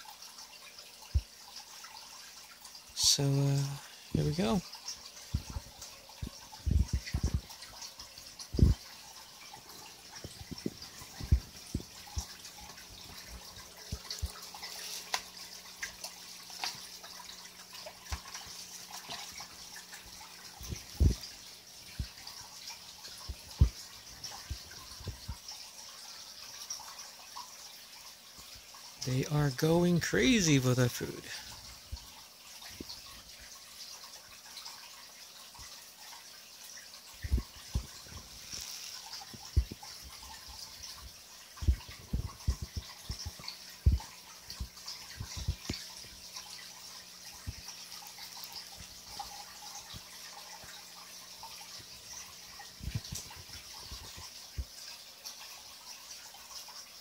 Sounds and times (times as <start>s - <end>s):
Water: 0.0s - 57.0s.